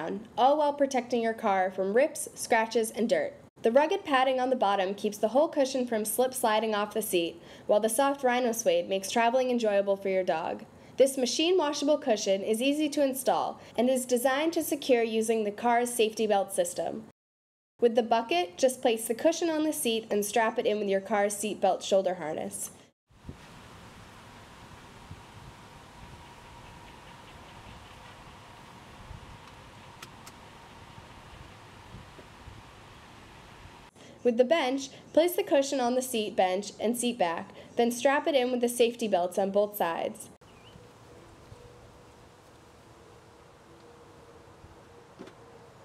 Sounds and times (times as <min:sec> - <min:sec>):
Speech: 0:00.0 - 0:17.1, 0:17.8 - 0:22.8, 0:34.2 - 0:40.4.